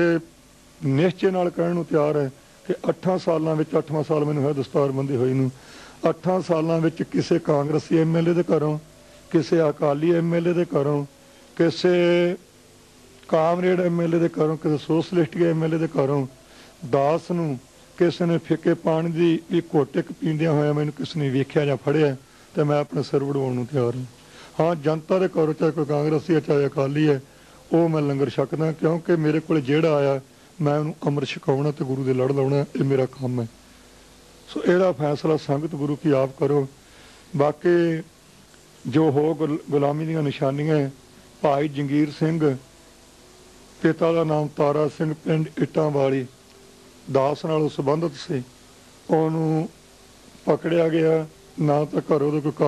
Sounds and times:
Male speech, man speaking: 0.0s - 12.4s, 13.3s - 33.5s, 34.5s - 36.8s, 37.4s - 38.1s, 38.8s - 42.6s, 43.8s - 46.4s, 47.1s - 48.5s, 49.1s - 49.8s, 50.4s - 52.6s
Narration, monologue: 0.0s - 52.6s.

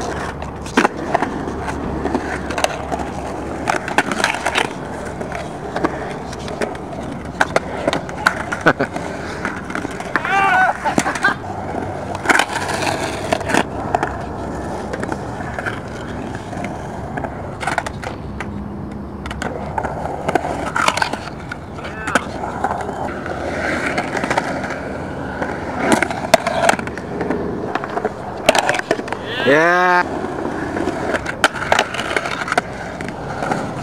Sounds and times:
Skateboard: 0.0s - 33.8s.

